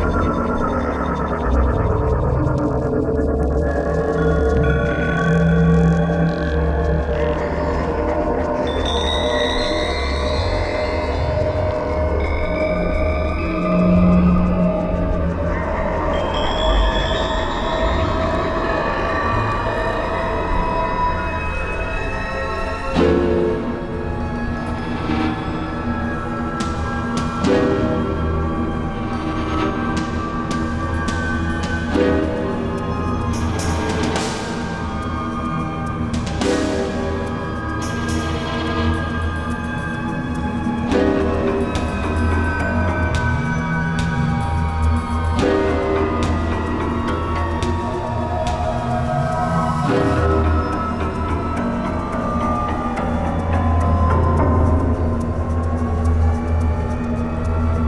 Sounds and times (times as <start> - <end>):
Music: 0.0 - 57.8.